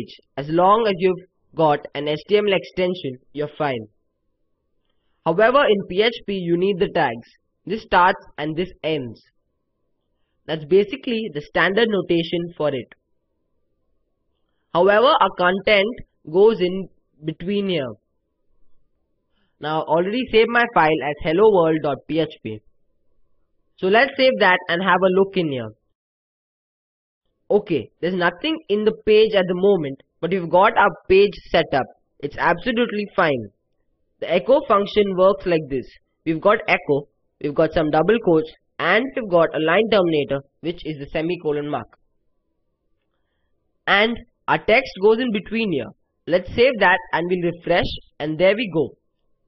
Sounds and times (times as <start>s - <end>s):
Speech: 0.0s - 3.9s, 5.3s - 9.3s, 10.5s - 13.0s, 14.7s - 18.0s, 19.6s - 22.7s, 23.8s - 25.8s, 27.5s - 33.6s, 34.2s - 42.0s, 43.9s - 49.0s.